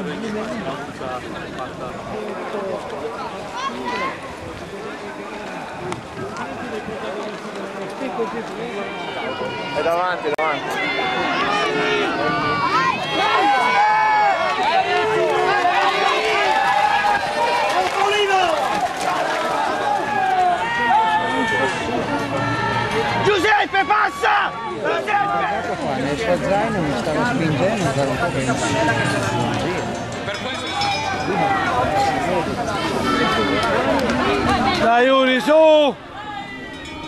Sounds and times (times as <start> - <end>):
Music: 27.4 - 32.2.